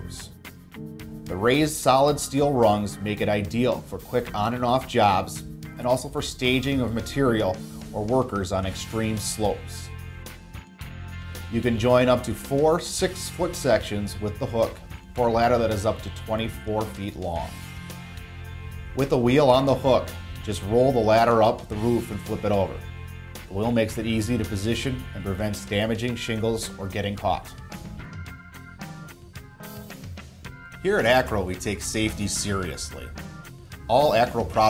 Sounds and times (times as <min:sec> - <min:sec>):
Speech: 0:00.0 - 0:00.4, 0:01.3 - 0:09.9, 0:11.5 - 0:17.6, 0:19.0 - 0:22.8, 0:23.5 - 0:27.6, 0:30.8 - 0:33.2, 0:33.9 - 0:34.6
Music: 0:00.0 - 0:34.6.